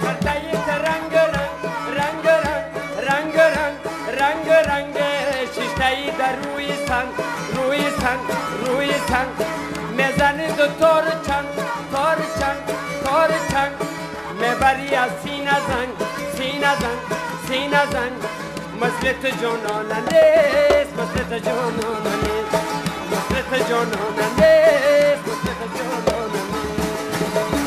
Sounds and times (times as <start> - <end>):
Music: 0.0 - 27.6.